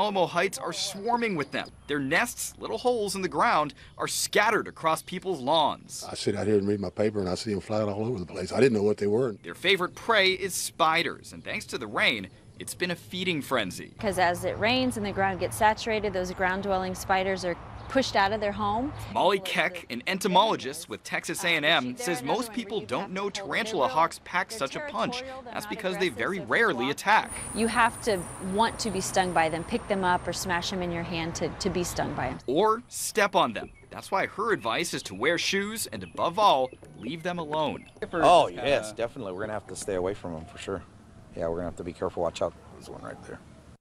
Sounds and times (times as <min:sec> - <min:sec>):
Speech: 0:00.0 - 0:40.8, 0:41.4 - 0:43.4.